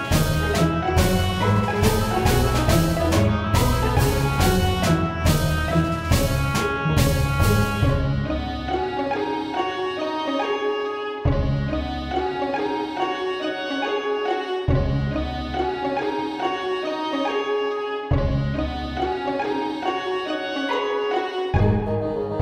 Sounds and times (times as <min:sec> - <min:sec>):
Background music: 0:00.0 - 0:22.4
Musical instrument: 0:00.0 - 0:22.4.